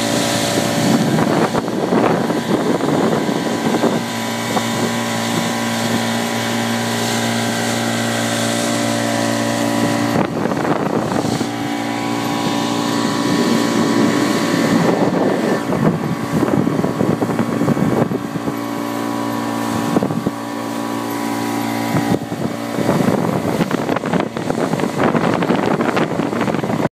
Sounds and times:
Motorboat, speedboat: 0.0s - 26.9s.

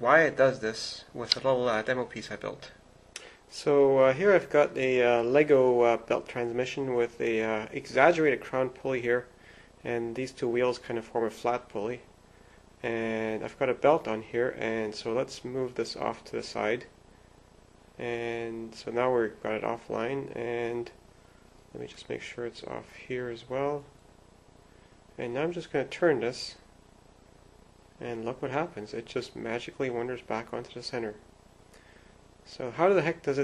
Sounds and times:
Speech: 0.0s - 2.8s, 3.5s - 12.1s, 12.8s - 17.0s, 18.0s - 21.0s, 21.7s - 24.0s, 25.2s - 26.7s, 28.0s - 31.3s, 32.5s - 33.4s.

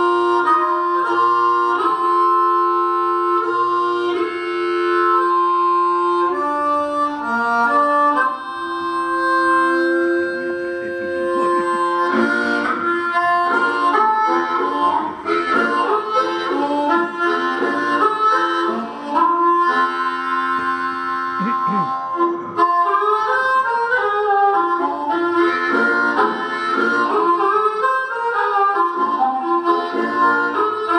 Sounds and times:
Harmonica: 0.0s - 30.9s.

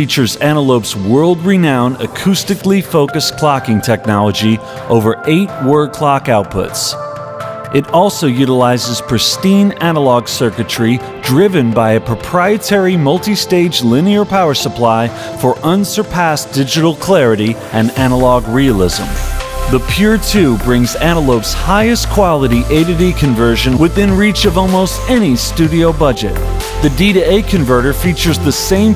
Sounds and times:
Speech: 0.0s - 7.0s, 7.8s - 28.9s
Music: 0.0s - 28.9s.

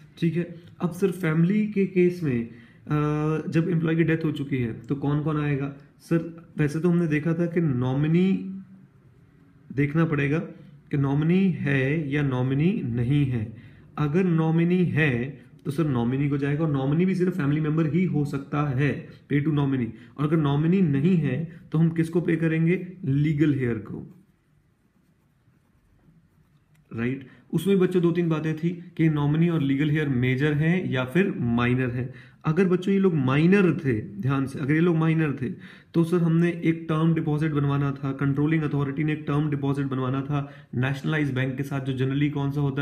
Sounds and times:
Speech: 0.0s - 8.6s, 9.7s - 24.2s, 26.9s - 42.8s.

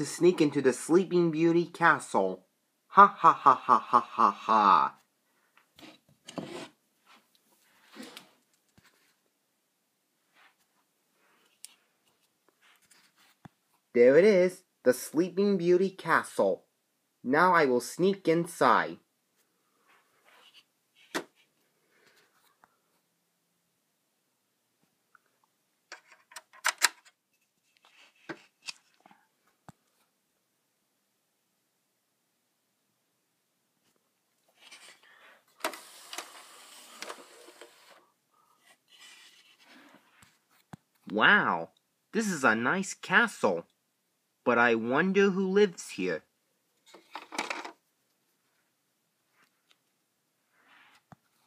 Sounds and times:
Speech: 0.0s - 5.0s, 13.9s - 19.1s, 41.0s - 43.8s, 44.4s - 46.3s.

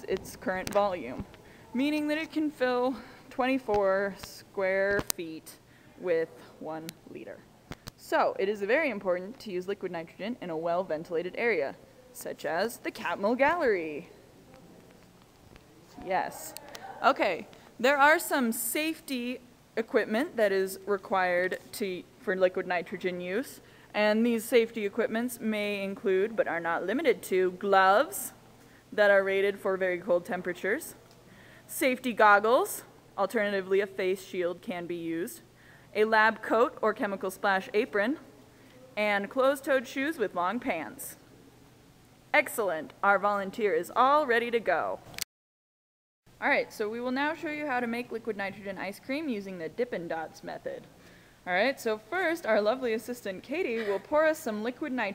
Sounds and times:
Speech: 0.0s - 7.4s, 8.0s - 14.7s, 15.9s - 28.4s, 29.0s - 31.0s, 31.7s - 35.4s, 36.0s - 38.3s, 38.9s - 41.2s, 42.4s - 45.0s, 46.4s - 50.9s, 51.5s - 55.1s.

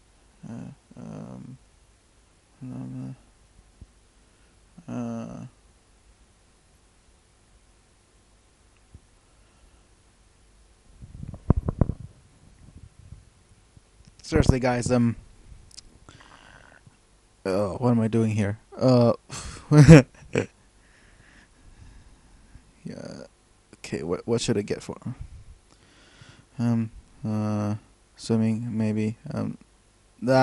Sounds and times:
Inside, small room: 0.0s - 30.4s
Speech: 0.4s - 1.6s, 2.6s - 3.2s, 4.8s - 5.6s, 14.2s - 15.2s, 17.5s - 20.0s, 22.8s - 25.2s, 26.6s - 29.6s, 30.2s - 30.4s.

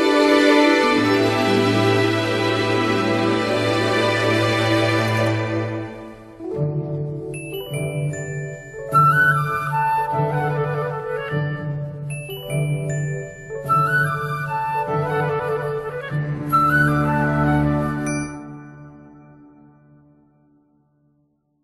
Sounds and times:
Music: 0.0s - 21.6s.

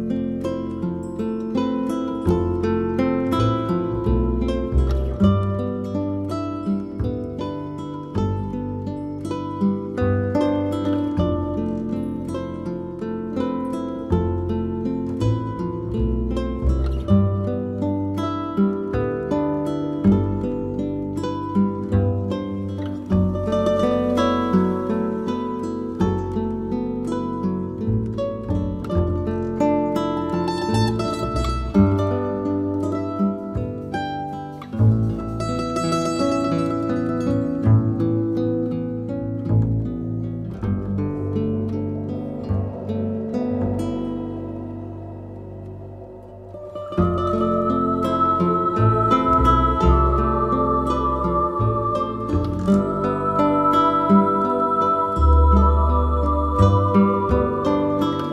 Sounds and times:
Pizzicato: 0.0s - 58.3s.

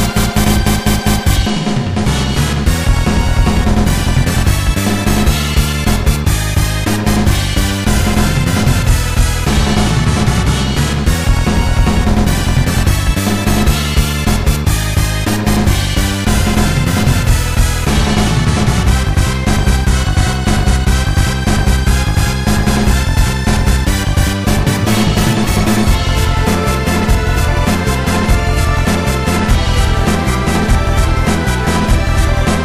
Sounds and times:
Video game music: 0.0s - 32.6s.

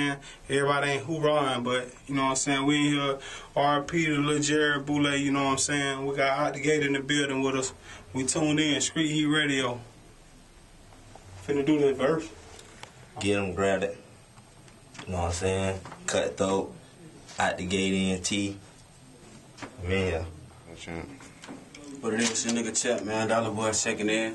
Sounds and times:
Speech: 0.0s - 9.9s, 11.4s - 12.4s, 15.0s - 18.6s, 21.8s - 24.3s.

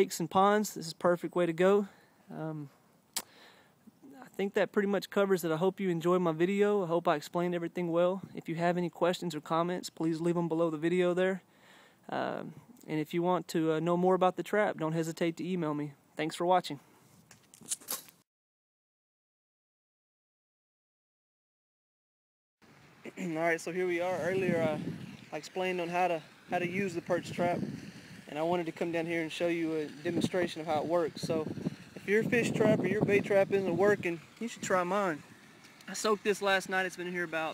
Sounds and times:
Outside, rural or natural: 0.0s - 18.3s, 22.6s - 37.5s.

